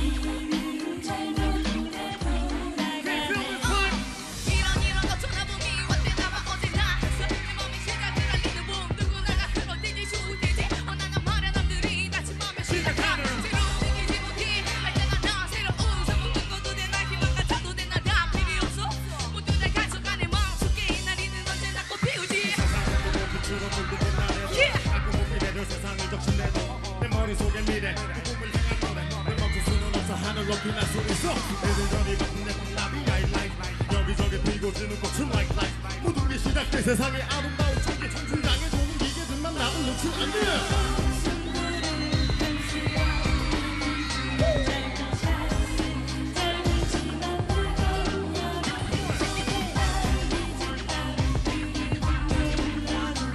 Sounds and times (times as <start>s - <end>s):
Dance music: 0.0s - 53.3s.